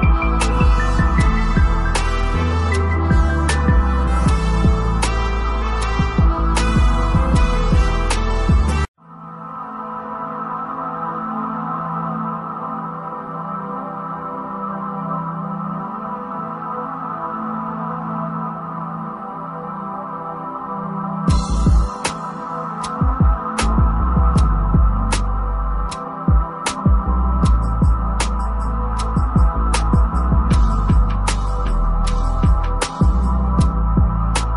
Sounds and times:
Ambient music: 0:00.0 - 0:34.5.

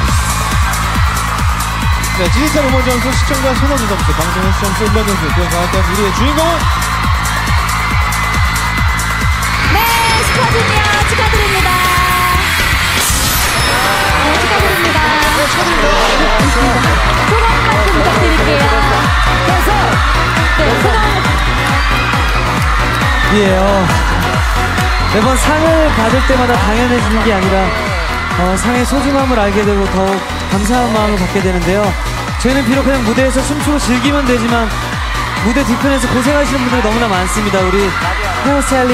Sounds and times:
Dance music: 0:00.0 - 0:38.9.

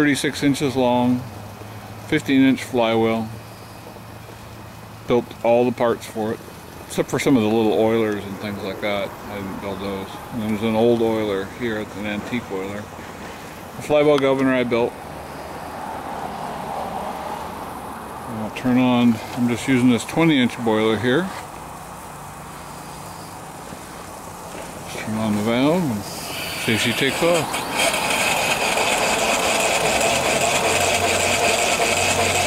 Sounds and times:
Speech: 0:00.0 - 0:01.3, 0:02.1 - 0:03.4, 0:05.1 - 0:12.9, 0:13.8 - 0:15.0, 0:18.3 - 0:21.4, 0:24.9 - 0:27.5
Medium engine (mid frequency): 0:00.0 - 0:32.4
Idling: 0:25.5 - 0:32.4
Engine starting: 0:26.0 - 0:32.4.

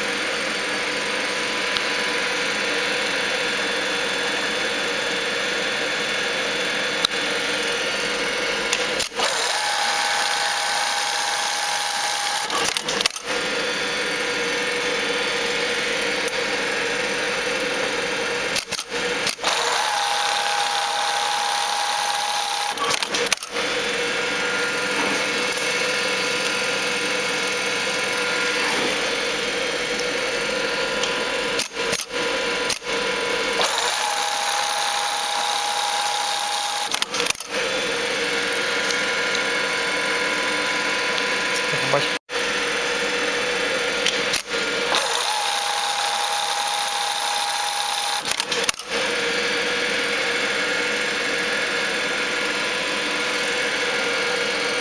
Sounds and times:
Sewing machine: 0:00.0 - 0:54.8
Speech: 0:41.6 - 0:42.2.

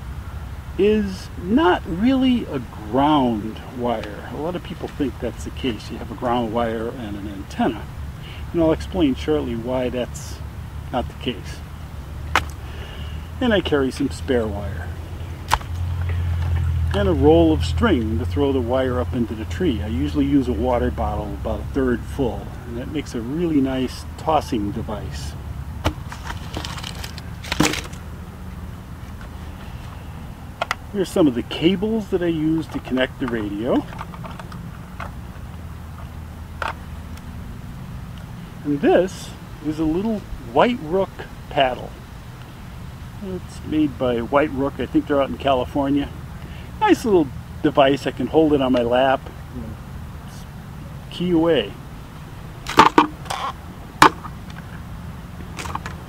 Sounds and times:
Male speech, man speaking: 0:00.8 - 0:11.6, 0:13.4 - 0:14.9, 0:16.9 - 0:25.4, 0:30.9 - 0:33.9, 0:38.6 - 0:42.0, 0:43.2 - 0:46.2, 0:46.8 - 0:50.5, 0:51.1 - 0:51.8.

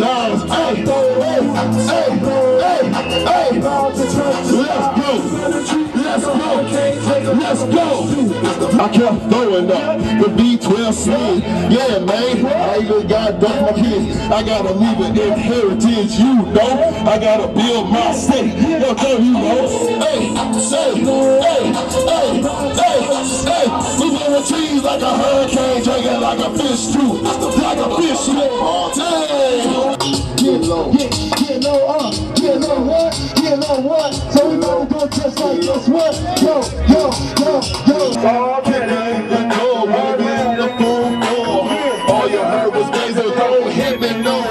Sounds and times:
Music: 0:00.0 - 0:44.5.

